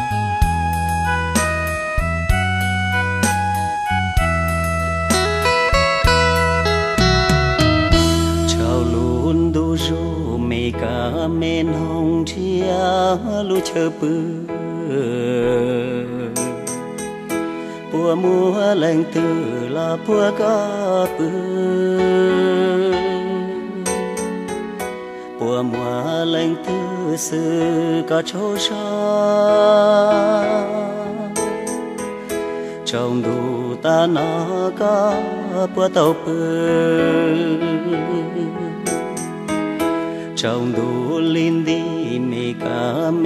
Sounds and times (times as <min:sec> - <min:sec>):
Music: 0:00.0 - 0:43.2.